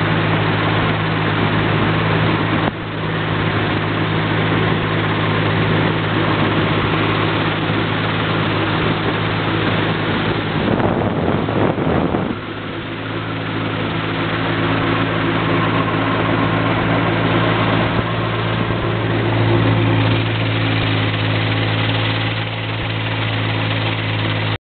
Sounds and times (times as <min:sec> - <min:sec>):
Motorboat, speedboat: 0:00.0 - 0:24.6.